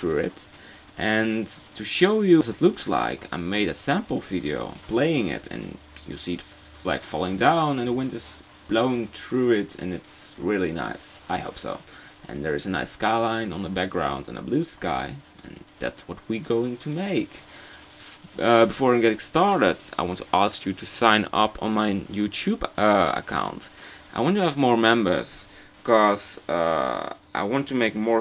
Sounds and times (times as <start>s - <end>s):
Speech: 0.0s - 28.2s.